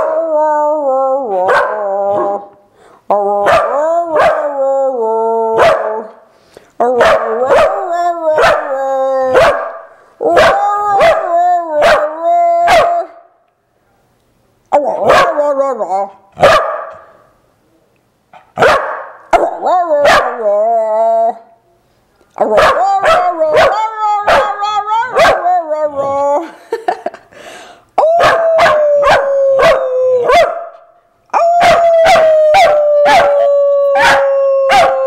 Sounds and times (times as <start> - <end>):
Bow-wow: 1.4 - 2.4, 3.4 - 4.5, 5.6 - 6.0, 7.0 - 7.8, 9.3 - 9.8, 11.8 - 12.0, 16.4 - 17.1, 18.6 - 20.3, 28.2 - 30.8, 34.0 - 35.0.